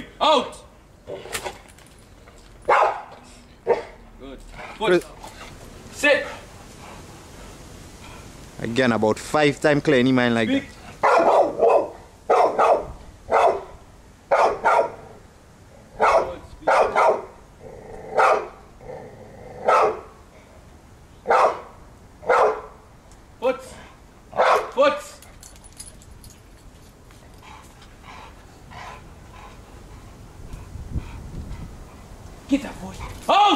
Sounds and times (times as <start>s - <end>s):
Canidae, dogs, wolves: 2.6s - 4.0s, 10.9s - 15.2s, 16.0s - 18.6s, 19.5s - 20.2s, 21.3s - 22.8s, 24.4s - 26.4s
Bark: 2.7s - 4.0s, 11.0s - 13.7s, 14.3s - 15.0s, 16.0s - 17.4s, 18.2s - 18.6s, 19.7s - 20.1s, 21.3s - 21.7s, 22.3s - 22.8s, 24.4s - 24.8s.